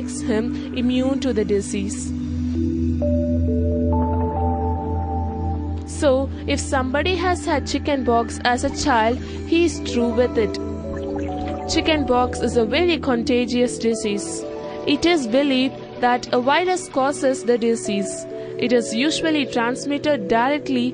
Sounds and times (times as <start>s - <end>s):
Speech: 0.0s - 2.2s, 5.9s - 10.6s, 11.7s - 20.9s
Music: 0.0s - 20.9s.